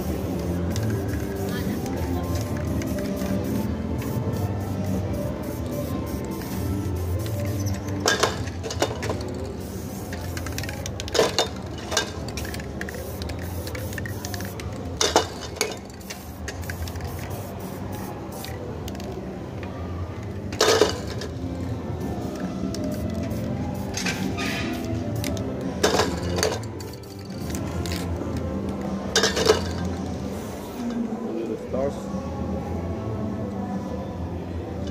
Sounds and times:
Spray: 0.0 - 11.4, 12.4 - 18.6, 22.2 - 26.1.

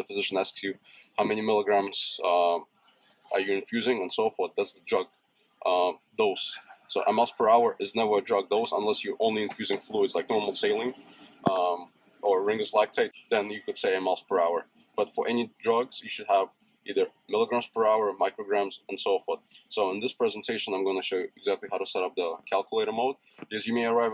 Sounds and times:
Speech: 0.0 - 2.6, 3.3 - 24.1.

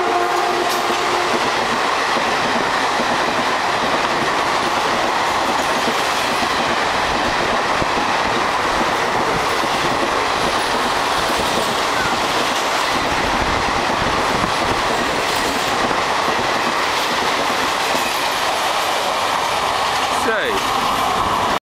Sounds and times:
Railroad car, train wagon: 0.0 - 21.6
Train: 0.0 - 21.6
Speech: 20.2 - 20.6.

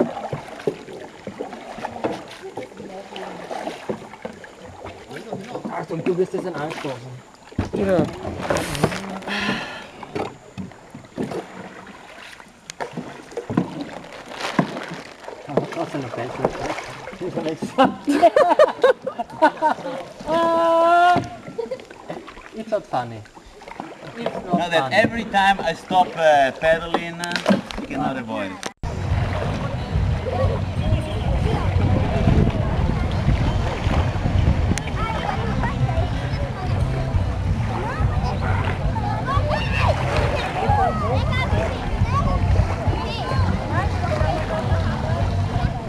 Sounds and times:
Rowboat, canoe, kayak: 0.0 - 45.8.

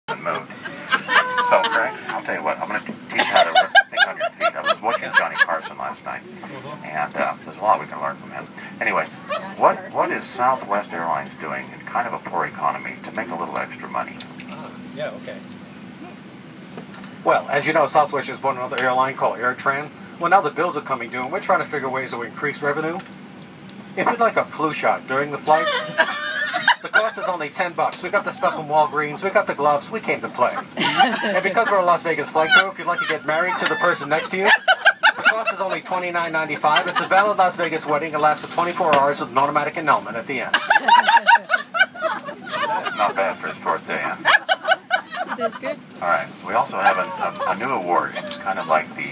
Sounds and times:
Speech: 1.2 - 15.4, 17.3 - 23.0, 24.0 - 25.7, 26.8 - 30.7, 31.3 - 40.6, 42.5 - 44.2, 45.3 - 49.1.

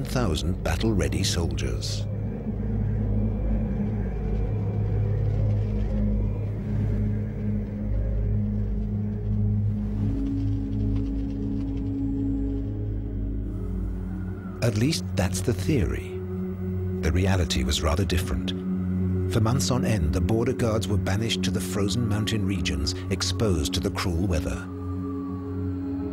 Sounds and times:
Speech: 0.0 - 2.0, 14.6 - 16.2, 17.0 - 18.6, 19.3 - 24.7
Music: 0.0 - 26.1
Outside, rural or natural: 0.0 - 26.1.

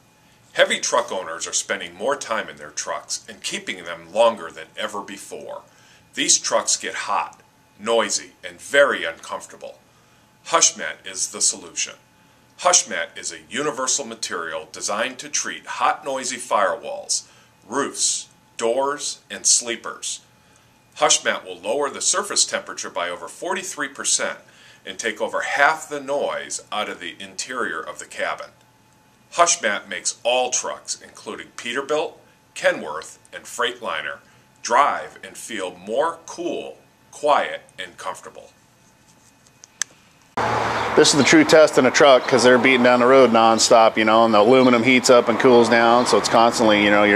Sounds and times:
Speech: 0.6 - 9.8, 10.5 - 12.0, 12.6 - 20.3, 21.0 - 28.6, 29.3 - 38.6, 41.0 - 47.1.

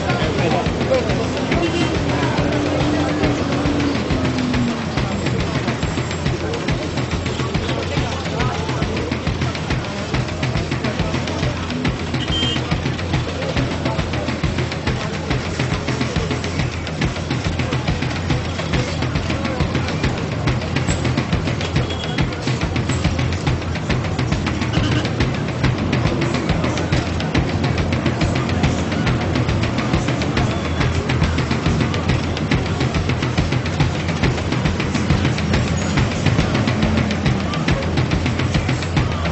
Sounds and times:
Music: 0.0 - 39.3
Speech: 0.0 - 39.3.

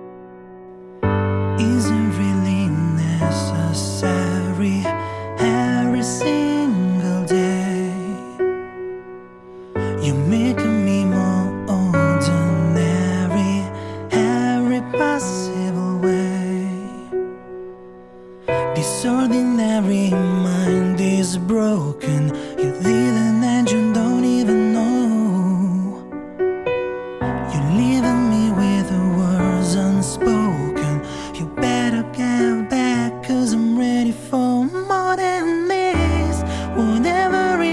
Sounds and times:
Music: 0.0 - 37.7.

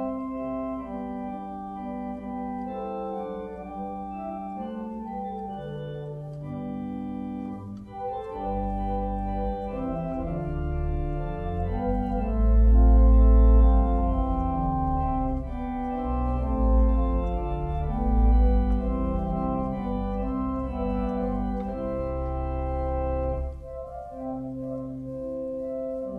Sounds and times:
Hammond organ: 0.0 - 26.1.

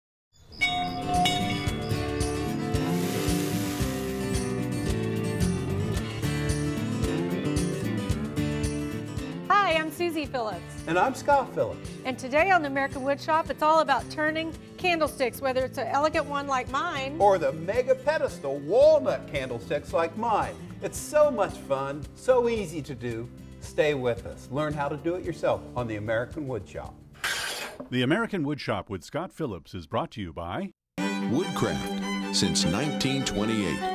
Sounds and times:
Music: 0.6 - 27.2, 31.0 - 33.9.

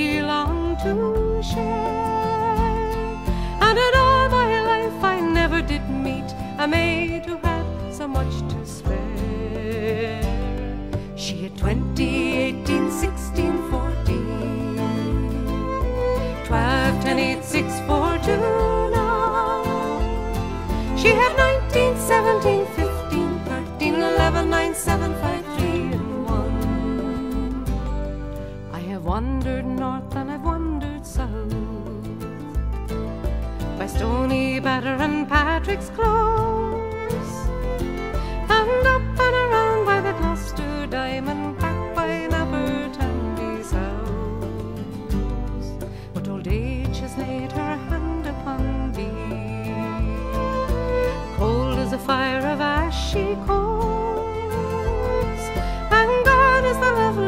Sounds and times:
Music: 0.0 - 57.2.

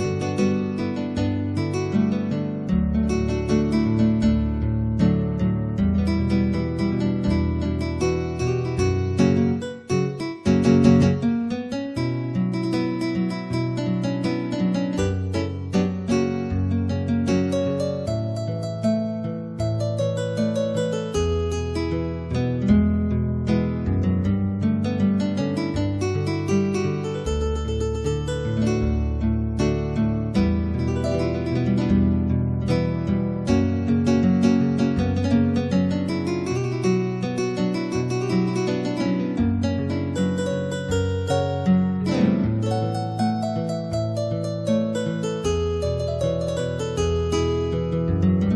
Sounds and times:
Piano: 0.0 - 48.5.

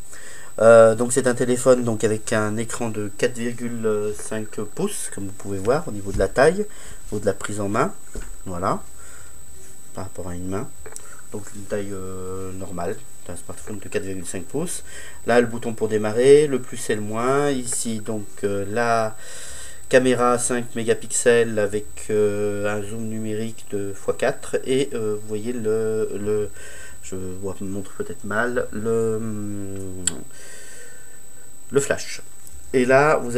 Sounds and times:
Speech: 0.6 - 8.9, 9.9 - 19.2, 19.9 - 30.3, 31.7 - 33.3.

